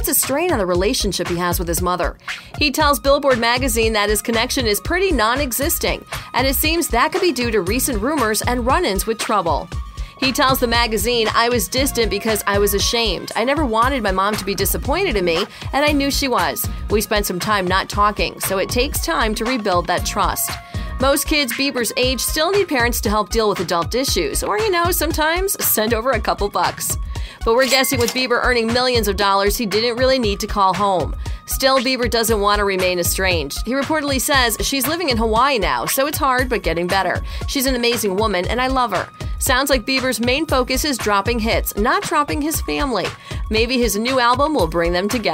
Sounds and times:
Music: 0.0s - 45.3s
Speech: 0.0s - 45.3s.

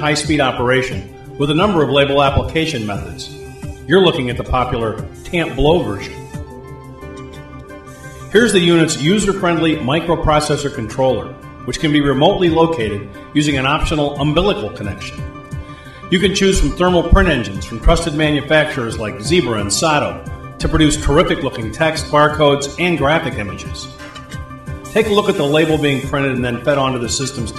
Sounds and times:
Speech: 0.0s - 6.2s, 8.4s - 15.2s, 16.1s - 24.0s, 25.0s - 27.5s
Music: 0.0s - 27.5s.

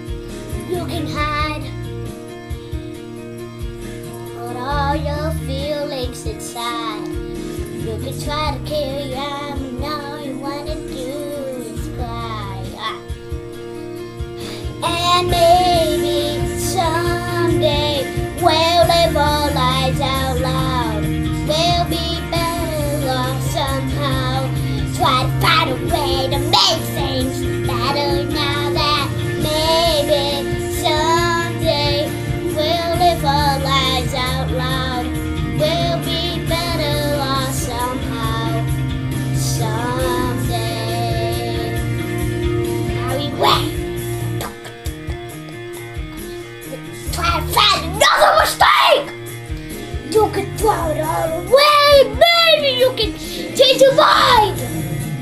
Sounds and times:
Music: 0.0s - 55.2s
Child singing: 0.6s - 1.7s, 4.4s - 7.2s, 7.8s - 13.1s, 14.8s - 38.8s, 39.4s - 41.8s, 42.9s - 43.8s, 46.8s - 49.2s, 50.0s - 54.8s.

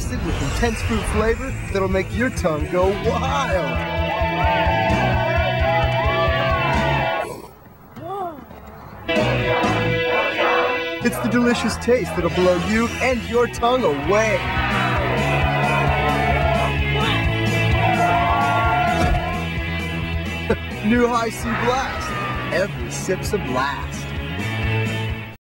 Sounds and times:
Music: 0.0s - 7.3s, 9.0s - 25.4s
Speech: 11.0s - 14.4s, 20.8s - 24.0s.

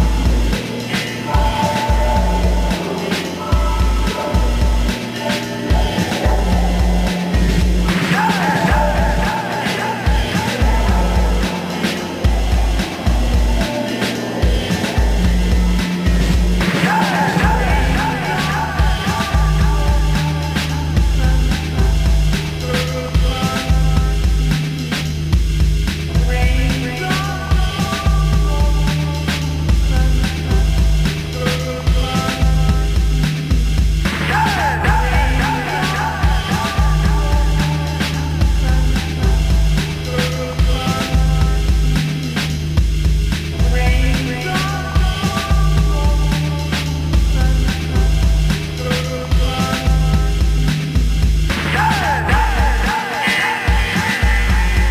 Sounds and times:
Soundtrack music: 0.0s - 25.0s
Exciting music: 0.0s - 54.9s.

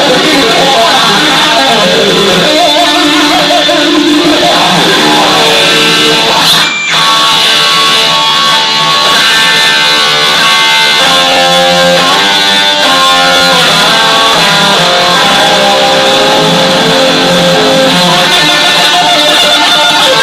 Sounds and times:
Music: 0.0s - 20.2s.

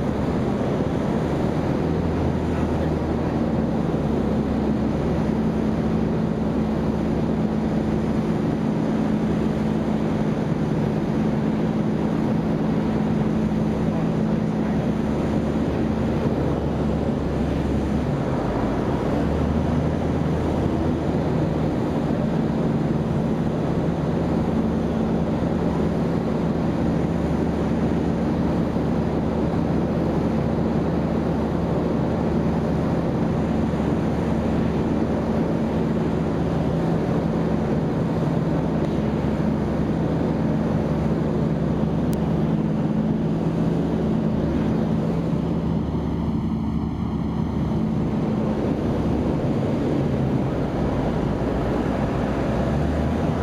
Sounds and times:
Aircraft: 0.0s - 53.4s
Engine: 0.0s - 53.4s.

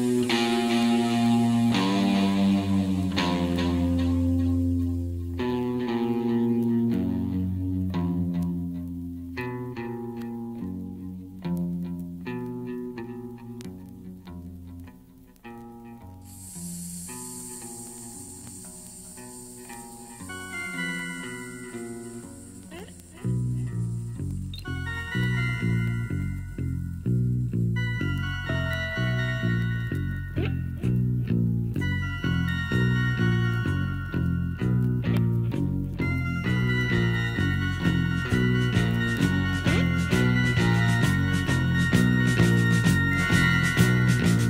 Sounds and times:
Music: 0.0s - 44.5s.

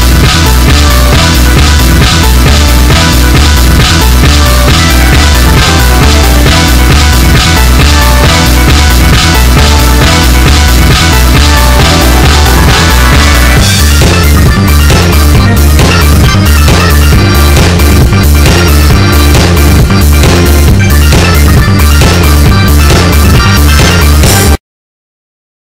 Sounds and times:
Sampler: 0.0s - 24.6s.

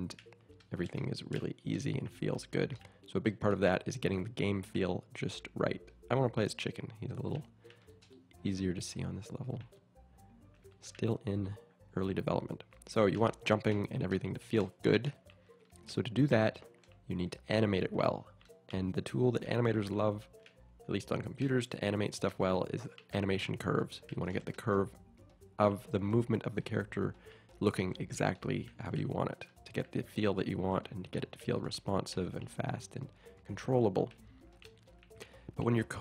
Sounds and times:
Speech: 0.0s - 7.5s, 8.4s - 9.7s, 10.8s - 15.2s, 15.9s - 20.2s, 20.9s - 25.0s, 25.6s - 34.2s, 35.5s - 36.0s.

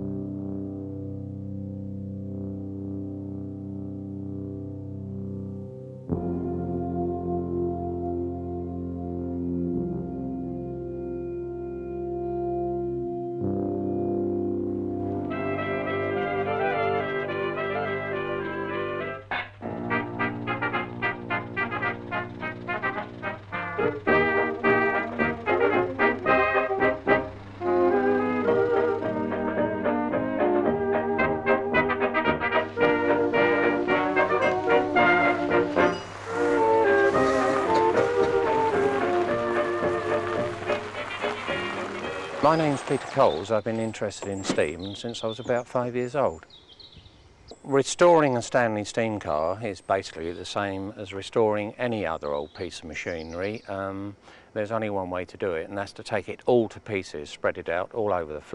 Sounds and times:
Music: 0.0s - 43.8s.

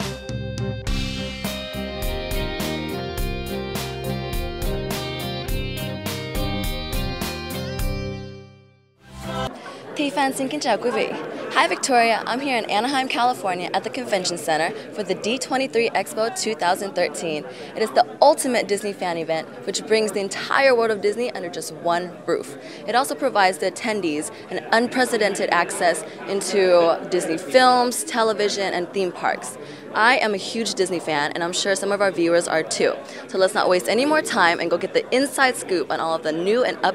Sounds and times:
Speech: 9.4s - 36.9s.

